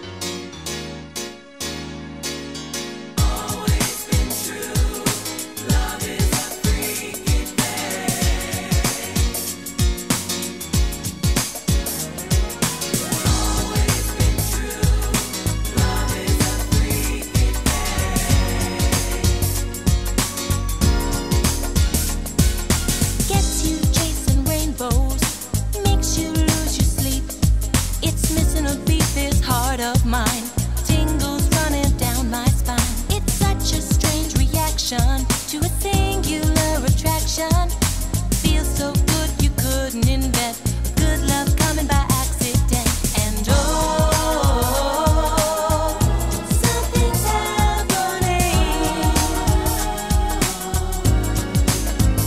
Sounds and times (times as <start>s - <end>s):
Singing: 3.2s - 9.6s, 12.0s - 19.6s, 38.6s - 51.8s
Funk: 3.2s - 52.2s.